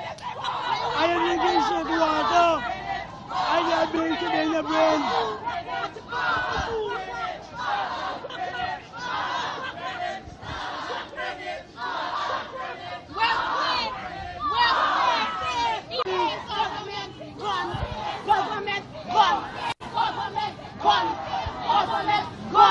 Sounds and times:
Outside, urban or manmade: 0.0 - 22.7.

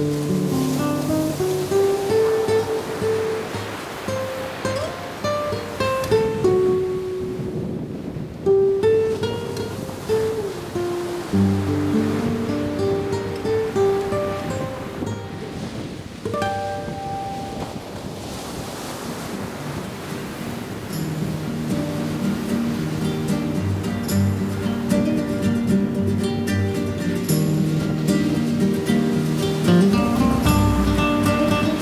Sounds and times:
Music: 0.0 - 7.6, 8.5 - 15.5, 16.3 - 17.6, 20.9 - 31.8.

